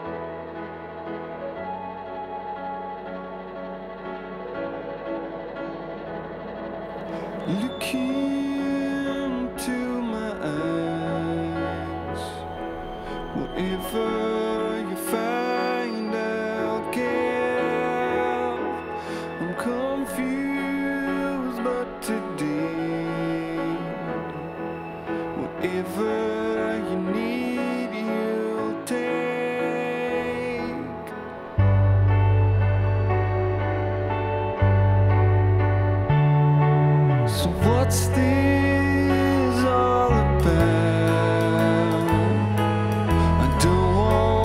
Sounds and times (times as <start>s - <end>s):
Music: 0.0s - 44.4s.